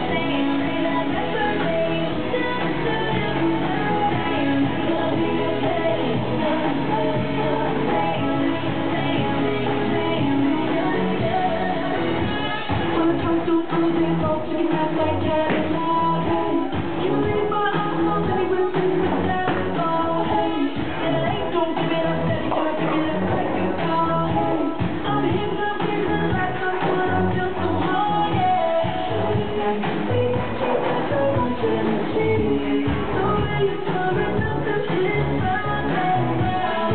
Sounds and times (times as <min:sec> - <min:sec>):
Music: 0:00.0 - 0:36.9.